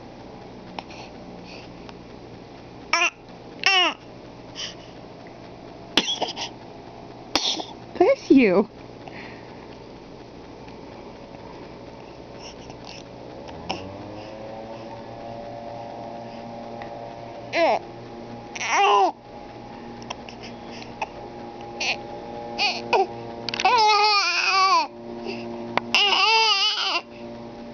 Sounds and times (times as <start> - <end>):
Sneeze: 7.4 - 7.7
Speech: 8.0 - 8.7.